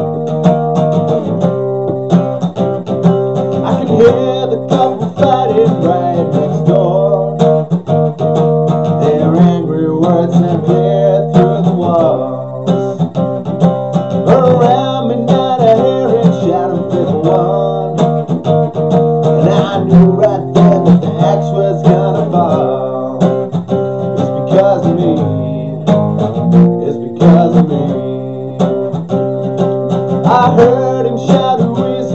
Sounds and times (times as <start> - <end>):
Music: 0.0 - 32.1.